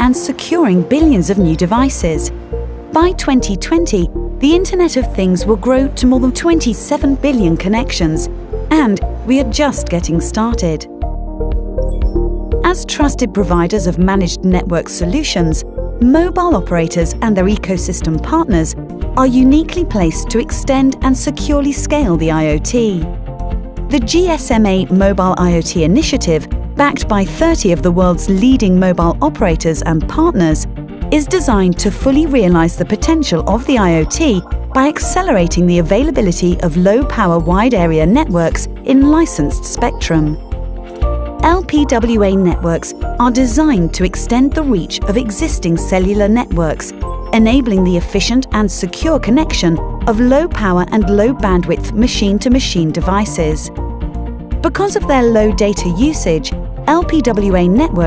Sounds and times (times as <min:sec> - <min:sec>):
Speech: 0:00.0 - 0:02.3, 0:03.0 - 0:10.9, 0:12.6 - 0:23.1, 0:23.9 - 0:40.4, 0:41.4 - 0:53.7, 0:54.7 - 0:58.0
Music: 0:00.0 - 0:58.0.